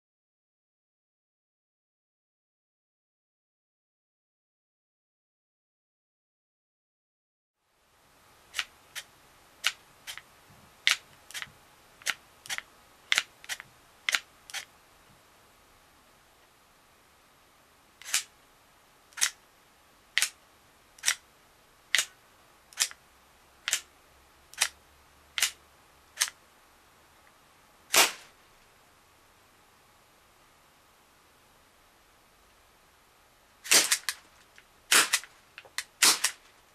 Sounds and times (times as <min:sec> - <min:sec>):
Inside, small room: 0:07.6 - 0:36.7.